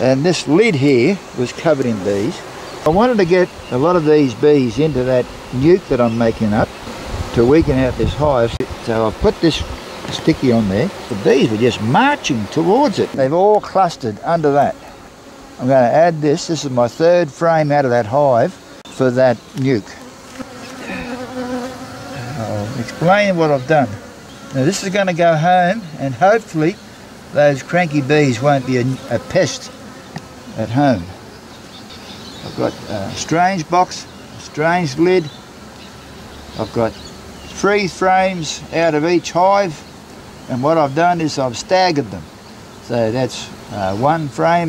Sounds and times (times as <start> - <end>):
Bee, wasp, etc.: 0.0 - 44.6
Fly, housefly: 0.0 - 44.6.